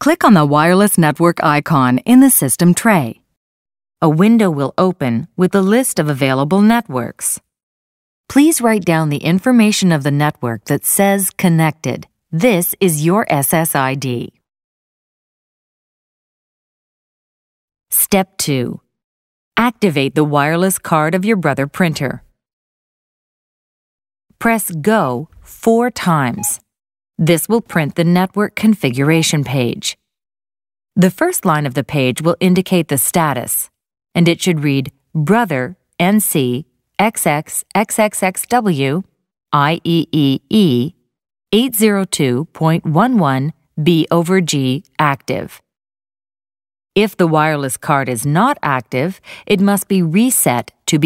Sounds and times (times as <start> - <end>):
Speech: 0.0 - 3.3, 4.0 - 7.4, 8.3 - 14.5, 17.9 - 18.8, 19.6 - 22.3, 24.4 - 26.6, 27.2 - 30.0, 31.0 - 41.0, 41.6 - 45.6, 47.0 - 51.0.